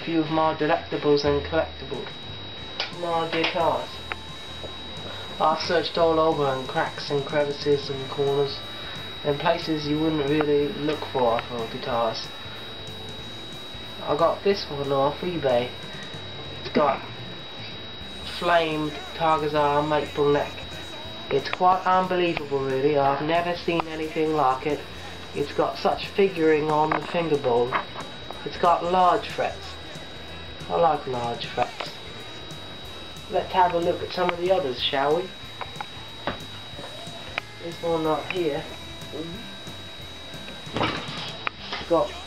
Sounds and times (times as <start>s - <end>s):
Speech: 0.0s - 2.1s, 2.9s - 4.0s, 5.4s - 8.6s, 9.2s - 12.3s, 14.0s - 15.8s, 16.6s - 17.1s, 18.3s - 27.8s, 28.4s - 30.0s, 30.6s - 32.0s, 33.3s - 35.3s, 37.6s - 39.5s, 41.8s - 42.2s
Music: 0.0s - 42.2s.